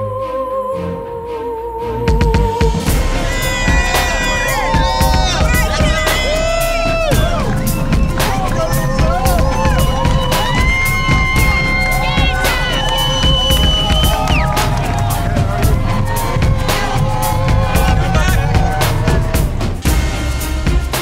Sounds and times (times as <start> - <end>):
Cheering: 2.9 - 20.2
Crowd: 2.9 - 21.0.